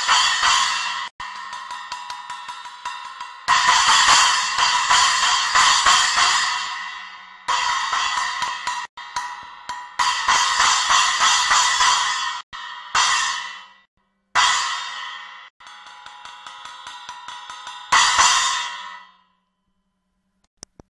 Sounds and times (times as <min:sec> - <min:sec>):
Music: 0:00.0 - 0:20.5.